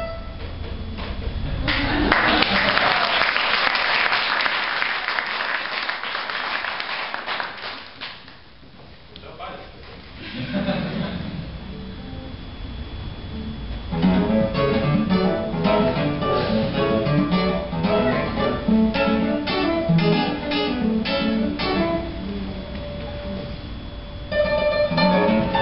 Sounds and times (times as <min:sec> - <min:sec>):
Clapping: 0:01.7 - 0:08.4
Speech: 0:09.1 - 0:09.9
Strum: 0:11.2 - 0:25.6
Acoustic guitar: 0:13.9 - 0:23.6, 0:24.3 - 0:25.6.